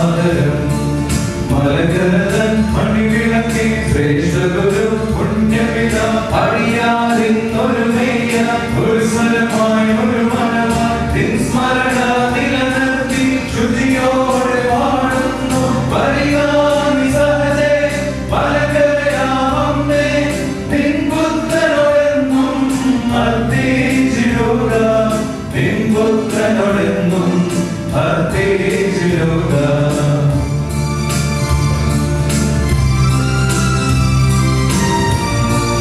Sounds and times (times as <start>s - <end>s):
Vocal music: 0.0s - 35.8s.